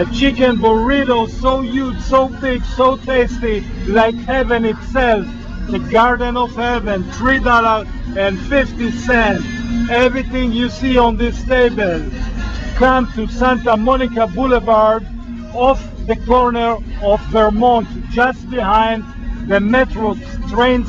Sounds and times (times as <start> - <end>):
Music: 0.0 - 20.8
Speech: 0.0 - 20.8.